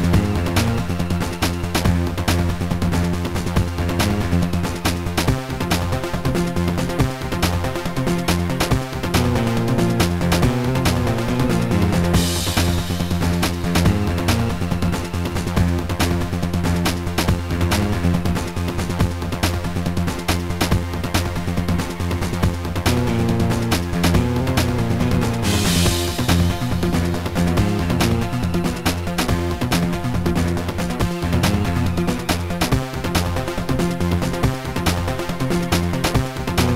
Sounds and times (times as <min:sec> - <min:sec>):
Video game music: 0:00.0 - 0:36.7.